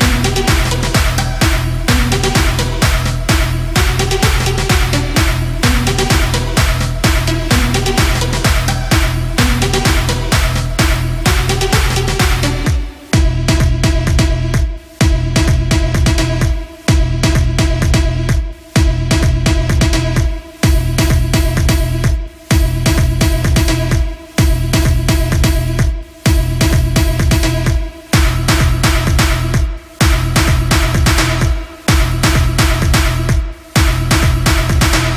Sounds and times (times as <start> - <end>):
Dance music: 0.0 - 35.1.